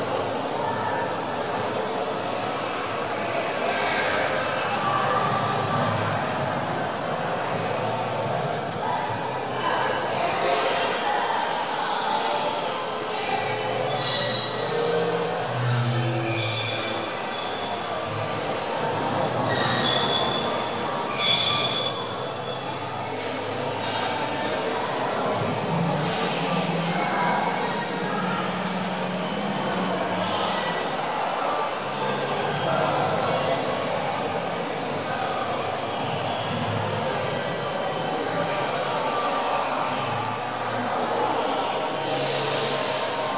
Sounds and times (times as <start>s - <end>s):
Truck: 0.0s - 43.3s.